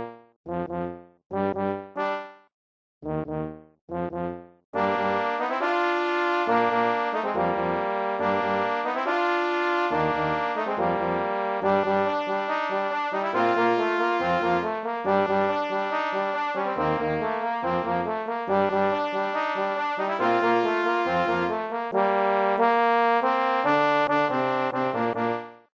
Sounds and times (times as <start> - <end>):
Trombone: 4.8 - 25.5.